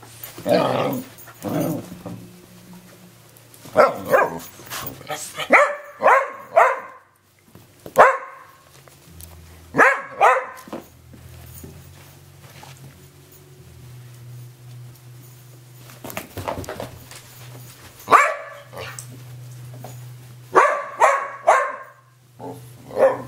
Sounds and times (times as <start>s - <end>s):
Canidae, dogs, wolves: 3.7s - 7.1s, 8.0s - 8.8s, 9.7s - 10.8s, 18.0s - 19.5s, 20.5s - 23.2s
Dog: 3.8s - 7.0s, 8.0s - 8.6s, 9.8s - 10.7s, 18.1s - 19.0s, 20.6s - 22.0s, 22.9s - 23.2s.